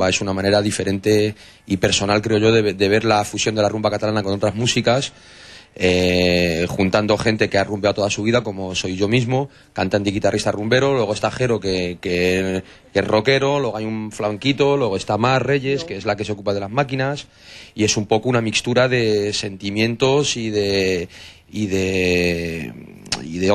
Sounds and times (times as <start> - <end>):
Speech: 0.0 - 5.1, 5.8 - 23.5.